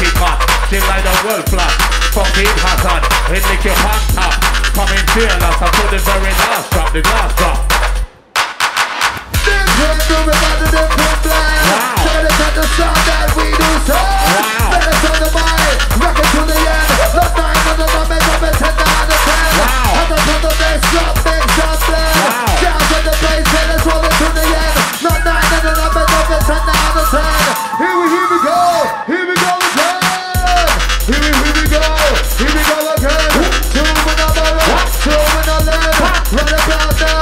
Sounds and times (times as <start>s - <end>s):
Drum and bass: 0.0s - 37.2s.